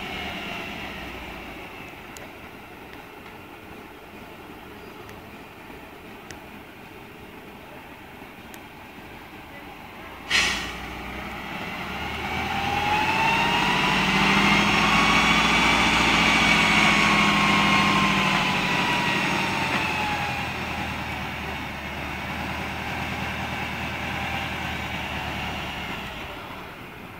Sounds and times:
Truck: 0.0s - 27.1s
Speech: 7.2s - 10.3s.

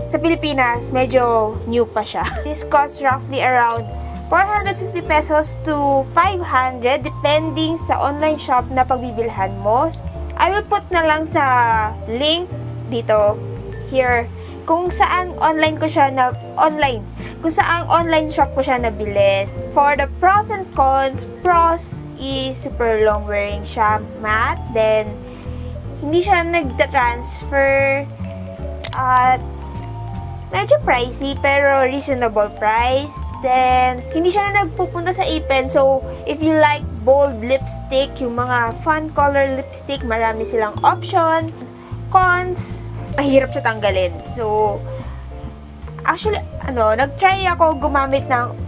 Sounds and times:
Speech: 0.0s - 25.2s, 26.0s - 28.1s, 28.9s - 29.4s, 30.6s - 41.5s, 42.1s - 44.8s, 46.0s - 48.6s
Music: 0.0s - 48.6s.

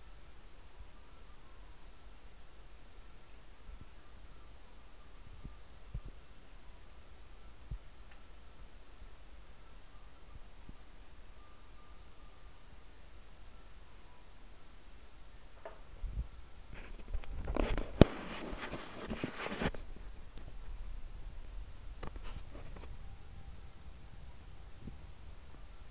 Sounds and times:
Inside, small room: 0.0s - 25.9s.

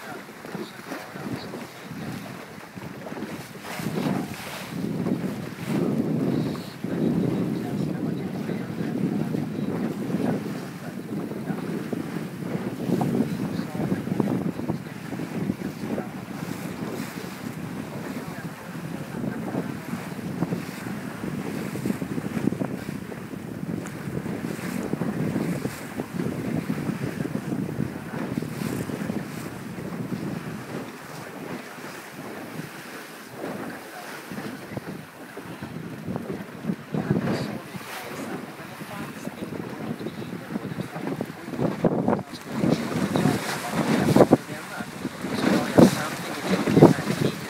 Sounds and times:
Speech: 0.0s - 2.5s, 4.0s - 4.4s, 5.6s - 12.2s, 12.8s - 21.3s, 28.0s - 29.4s, 33.6s - 35.6s, 36.3s - 47.5s
Rowboat, canoe, kayak: 0.0s - 47.5s
Sailboat, sailing ship: 0.0s - 47.5s.

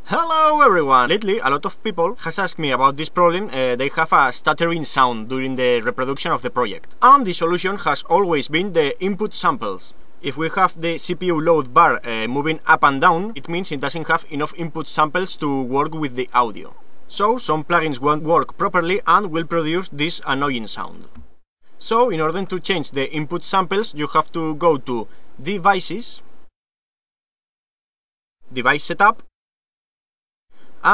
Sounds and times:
Speech: 0.0s - 21.1s, 21.8s - 26.2s, 28.5s - 29.3s.

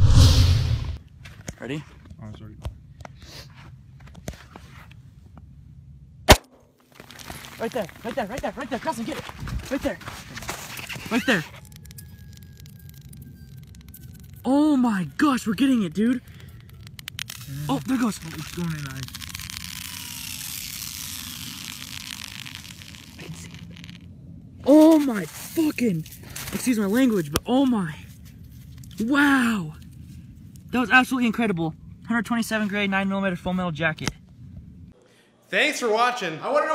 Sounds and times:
Speech: 7.6s - 10.0s, 35.5s - 36.7s.

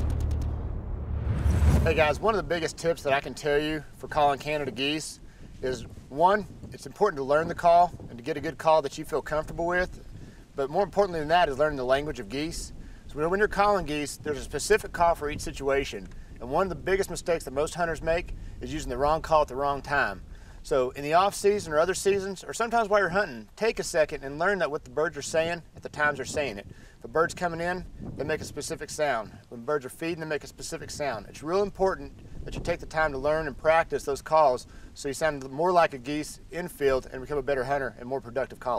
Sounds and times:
Speech: 1.8s - 10.0s, 10.6s - 38.7s.

